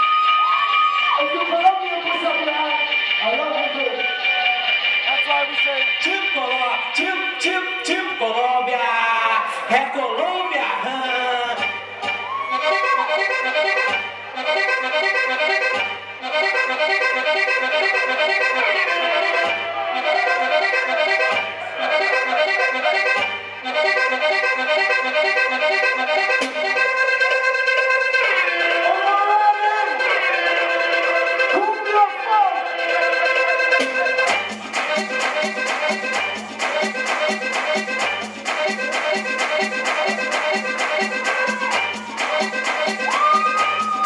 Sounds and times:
Music: 0:00.0 - 0:44.0.

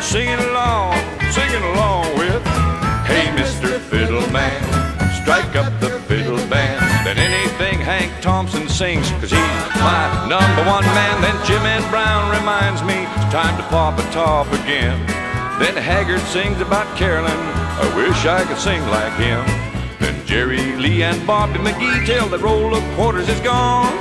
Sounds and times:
Country: 0:00.0 - 0:24.0
Male singing: 0:00.0 - 0:24.0.

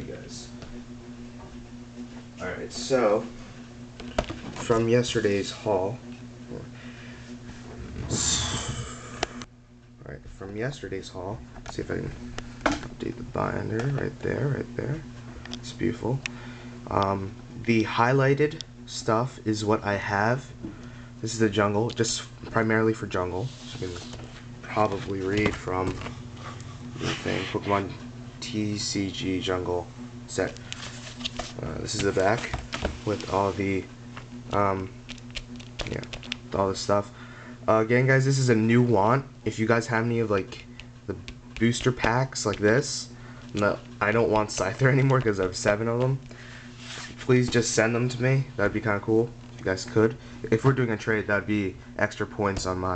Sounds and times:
Speech: 0:00.0 - 0:00.6, 0:02.4 - 0:03.4, 0:04.6 - 0:06.7, 0:10.0 - 0:12.2, 0:13.0 - 0:16.2, 0:16.9 - 0:20.5, 0:21.2 - 0:26.1, 0:27.0 - 0:30.6, 0:31.6 - 0:33.9, 0:34.5 - 0:34.9, 0:35.8 - 0:37.1, 0:37.7 - 0:46.2, 0:47.2 - 0:52.9.

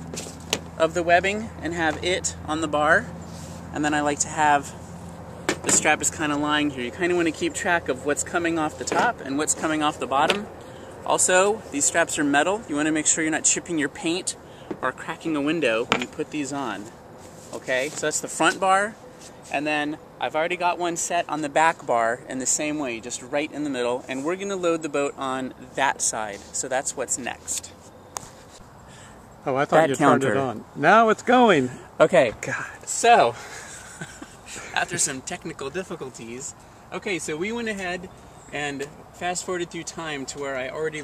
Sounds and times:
Speech: 0:00.8 - 0:03.1, 0:03.8 - 0:04.8, 0:05.7 - 0:10.5, 0:11.1 - 0:16.9, 0:17.5 - 0:27.7, 0:29.5 - 0:33.4, 0:34.8 - 0:41.0.

